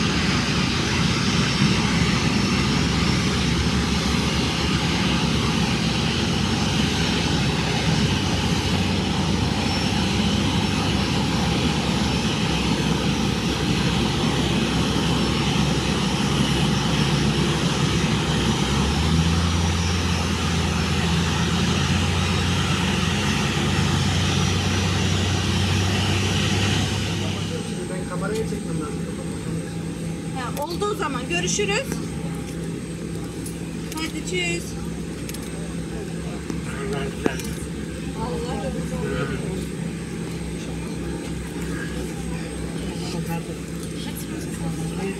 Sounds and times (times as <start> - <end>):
Fixed-wing aircraft, airplane: 0.0 - 45.1.